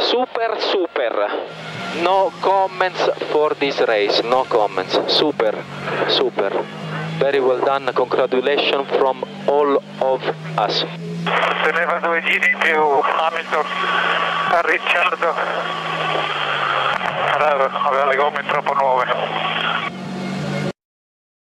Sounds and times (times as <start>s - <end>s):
Speech: 0.0s - 1.4s, 2.0s - 15.7s, 17.2s - 19.9s.